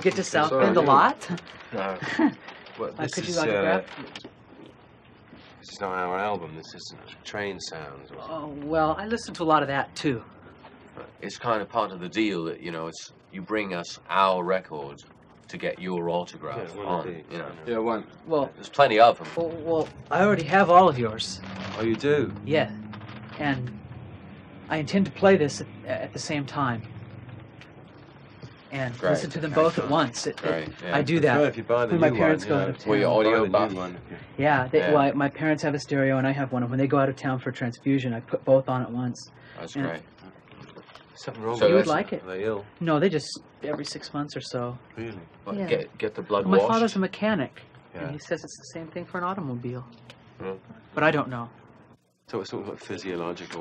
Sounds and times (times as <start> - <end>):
Speech: 0.0 - 2.1, 2.8 - 4.1, 5.7 - 10.2, 11.0 - 22.7, 24.7 - 26.8, 28.8 - 40.3, 41.2 - 51.5, 52.3 - 53.6.